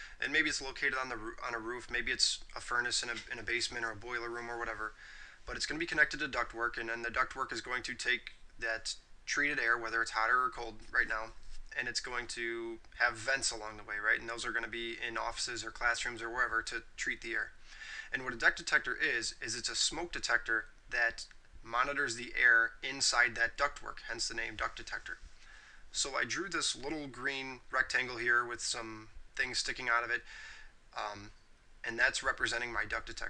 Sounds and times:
Narration, monologue: 0:00.0 - 0:33.3.

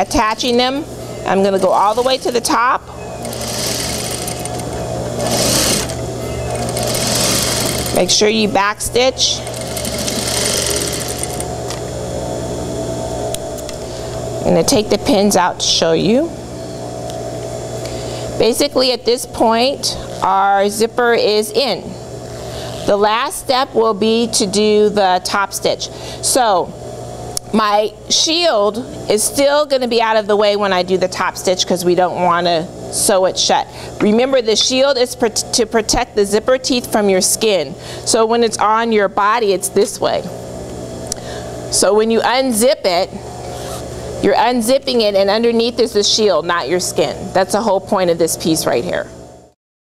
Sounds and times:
Speech: 0:08.0 - 0:09.4, 0:14.4 - 0:16.3, 0:18.4 - 0:22.0, 0:27.6 - 0:40.3, 0:41.8 - 0:43.2, 0:44.2 - 0:49.2.

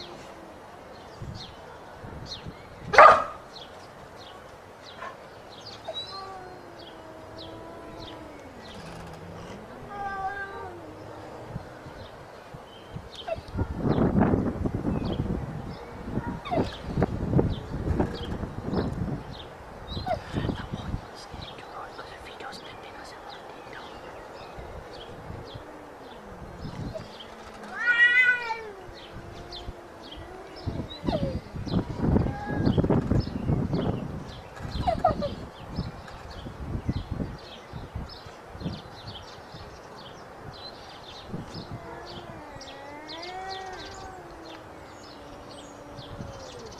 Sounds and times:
Meow: 0:09.9 - 0:10.9, 0:27.7 - 0:31.4, 0:32.2 - 0:32.8, 0:41.6 - 0:46.7.

